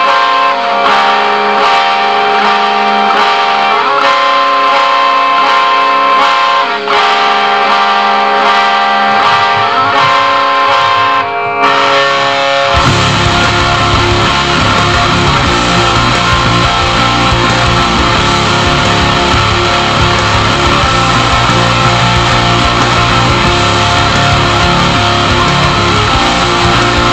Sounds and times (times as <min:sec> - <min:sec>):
Guitar: 0:00.0 - 0:27.1.